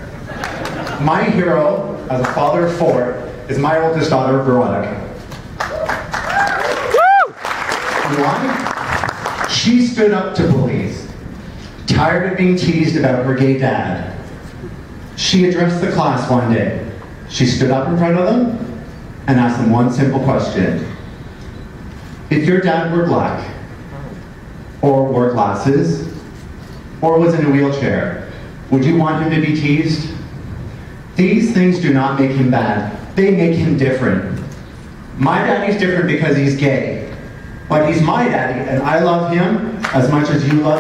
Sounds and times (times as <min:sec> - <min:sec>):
Narration, monologue: 0:00.9 - 0:05.6, 0:07.9 - 0:40.8
Male speech, man speaking: 0:01.0 - 0:05.1, 0:08.0 - 0:08.6, 0:09.5 - 0:11.1, 0:11.9 - 0:14.2, 0:15.2 - 0:18.7, 0:19.3 - 0:20.9, 0:22.3 - 0:24.2, 0:24.8 - 0:26.2, 0:27.0 - 0:30.2, 0:31.2 - 0:34.5, 0:35.2 - 0:37.1, 0:37.7 - 0:40.8.